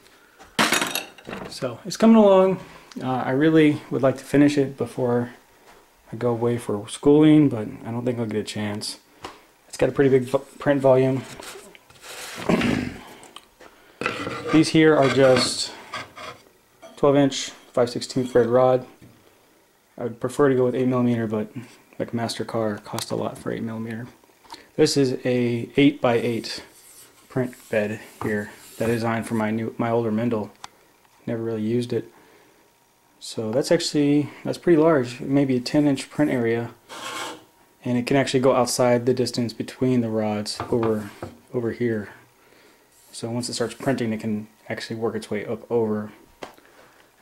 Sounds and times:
Inside, small room: 0:00.0 - 0:47.2
Speech: 0:01.4 - 0:05.4, 0:06.1 - 0:09.0, 0:09.7 - 0:11.4, 0:14.5 - 0:15.8, 0:17.0 - 0:19.0, 0:20.0 - 0:24.2, 0:24.8 - 0:30.6, 0:31.2 - 0:32.1, 0:33.2 - 0:36.8, 0:37.8 - 0:42.2, 0:43.1 - 0:46.2.

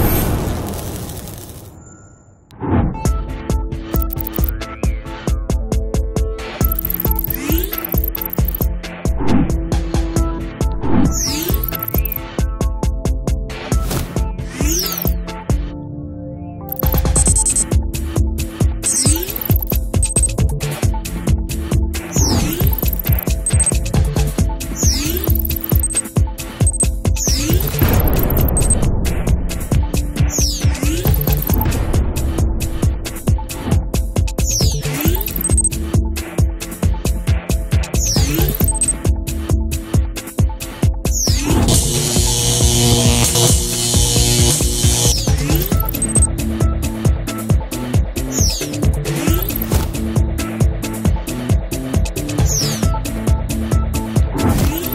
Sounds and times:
Music: 0:02.7 - 0:54.9.

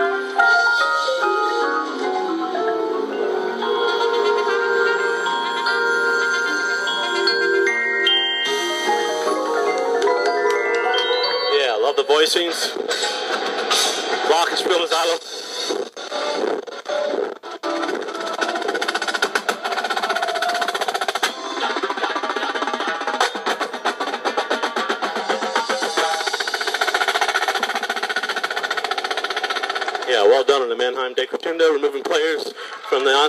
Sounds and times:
Speech: 0:11.5 - 0:12.8, 0:14.3 - 0:15.2, 0:30.1 - 0:33.2
Drum: 0:12.7 - 0:30.8.

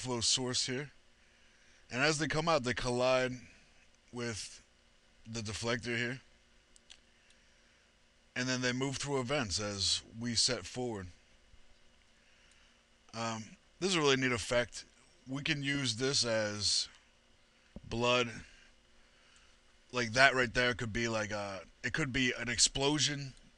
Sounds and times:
Speech: 0:00.0 - 0:01.0, 0:01.9 - 0:03.5, 0:04.2 - 0:04.7, 0:05.3 - 0:06.3, 0:08.4 - 0:11.2, 0:13.1 - 0:17.0, 0:17.8 - 0:18.6, 0:19.9 - 0:23.4.

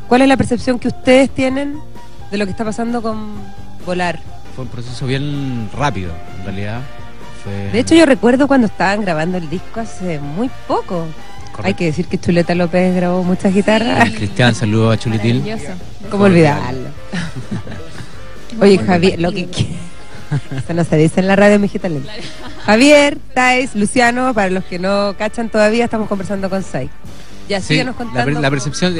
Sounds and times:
Music: 0:00.0 - 0:28.9
Speech: 0:04.6 - 0:06.9, 0:11.6 - 0:16.9, 0:18.6 - 0:19.8, 0:27.5 - 0:28.9.

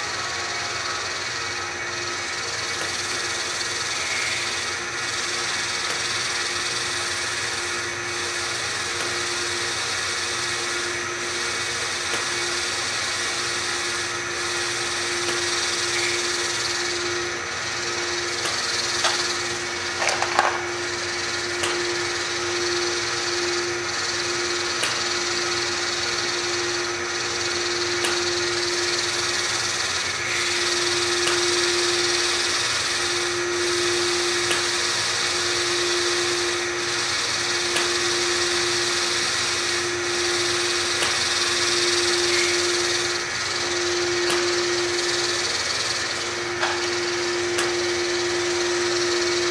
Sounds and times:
Power tool: 0:00.0 - 0:49.5.

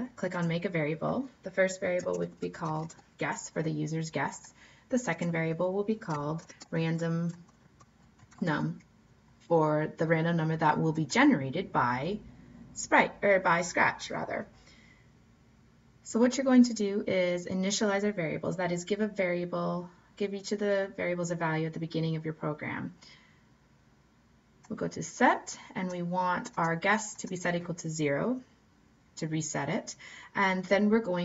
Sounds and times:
Speech: 0:00.0 - 0:07.4, 0:08.3 - 0:14.5, 0:16.0 - 0:23.0, 0:24.6 - 0:28.5, 0:29.2 - 0:31.2.

